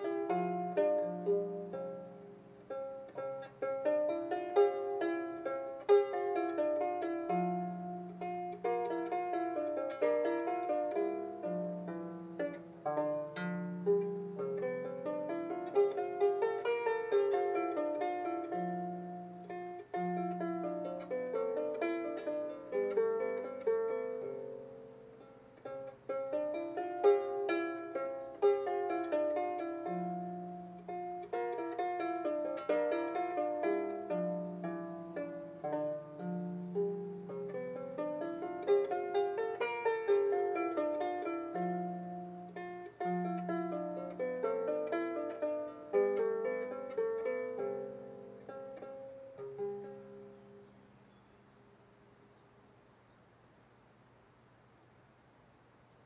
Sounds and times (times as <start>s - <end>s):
Music: 0.0s - 50.7s.